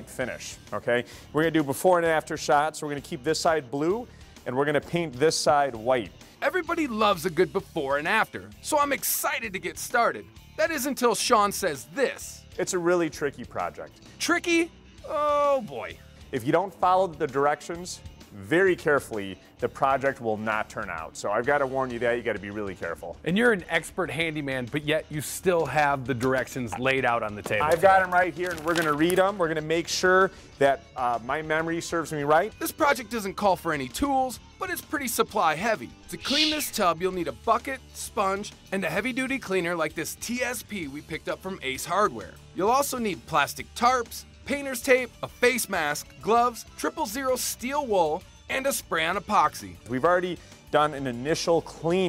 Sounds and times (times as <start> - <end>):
Music: 0.0 - 52.0
Speech: 0.0 - 52.0.